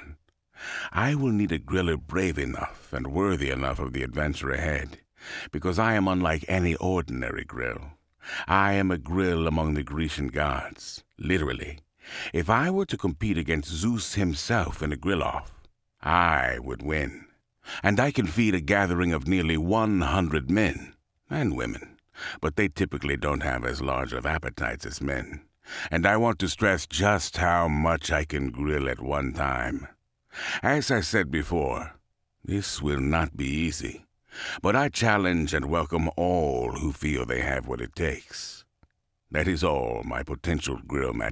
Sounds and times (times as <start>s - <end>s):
Speech: 0.8s - 38.7s, 39.3s - 41.3s.